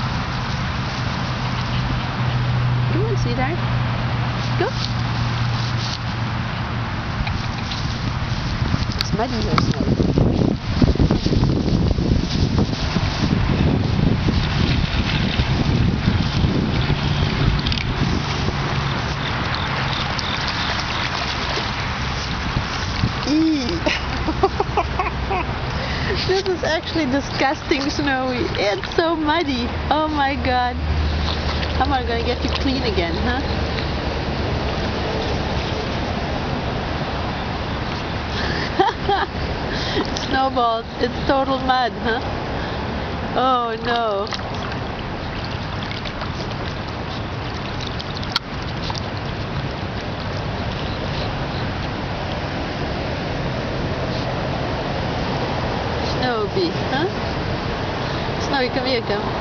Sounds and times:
Outside, rural or natural: 0.0s - 59.4s.

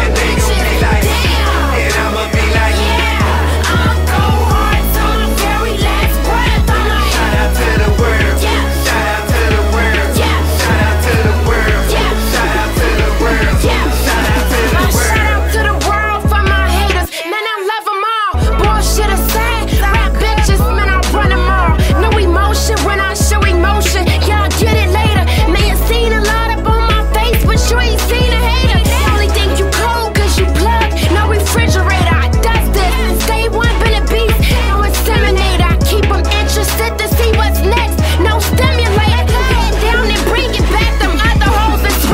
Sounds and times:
Music: 0.0s - 42.1s.

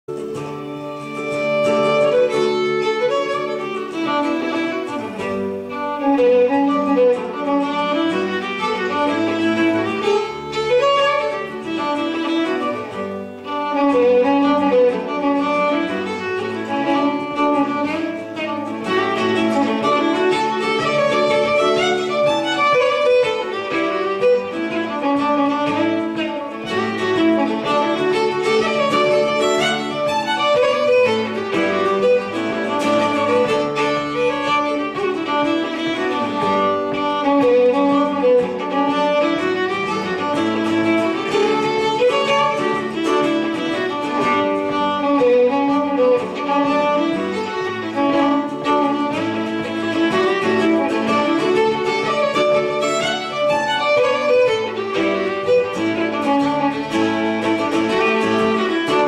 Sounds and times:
Guitar: 0.0s - 59.0s
Violin, fiddle: 0.0s - 59.0s.

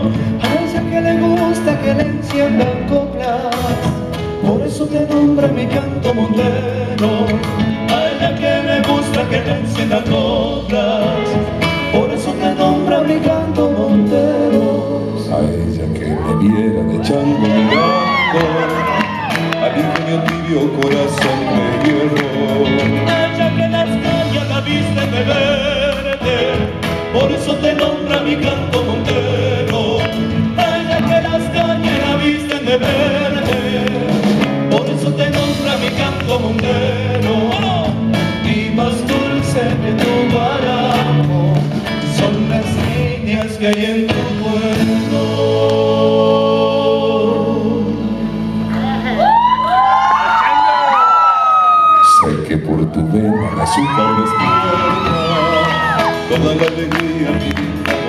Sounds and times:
Music: 0.0s - 58.0s.

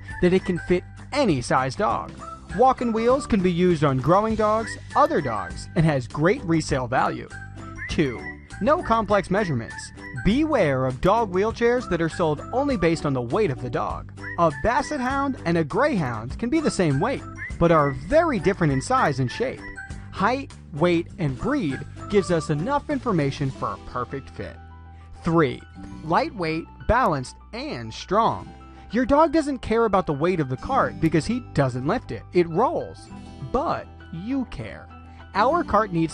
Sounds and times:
Music: 0.0s - 36.1s
Speech: 0.2s - 19.6s, 20.2s - 24.6s, 25.2s - 36.1s.

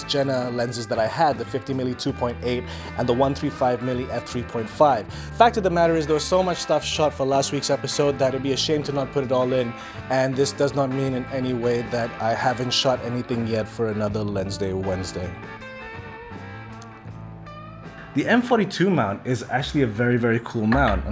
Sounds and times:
Speech: 0.0s - 15.4s, 18.2s - 21.1s
Music: 0.0s - 21.1s.

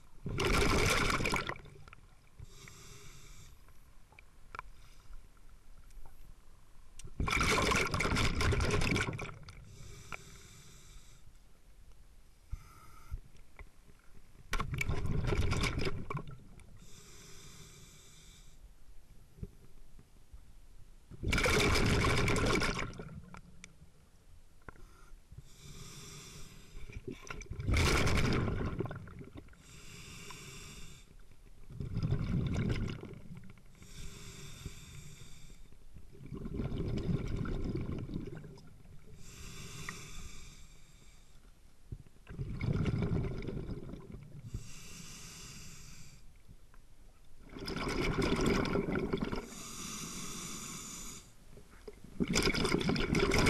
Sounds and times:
Fill (with liquid): 0.3s - 1.7s, 7.2s - 9.5s, 21.3s - 23.1s, 27.3s - 29.3s, 42.3s - 44.2s, 47.5s - 49.5s, 52.2s - 53.5s.

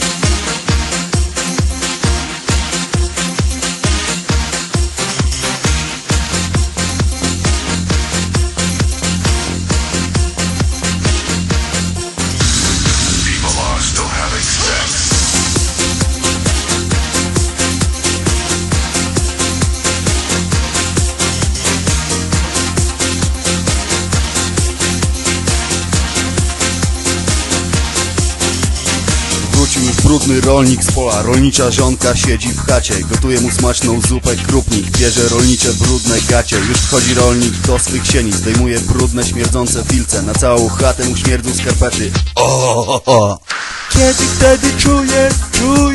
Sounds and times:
Music: 0.0s - 42.8s, 43.4s - 45.9s
Speech: 13.2s - 15.1s, 29.5s - 45.9s.

